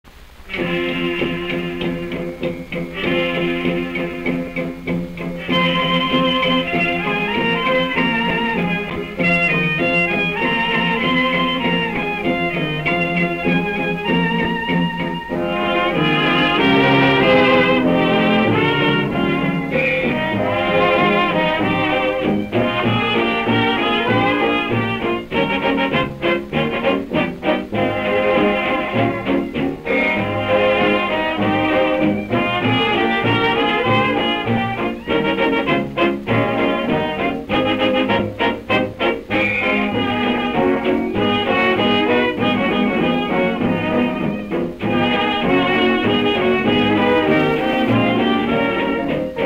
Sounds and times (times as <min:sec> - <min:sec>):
Music: 0:00.1 - 0:49.4.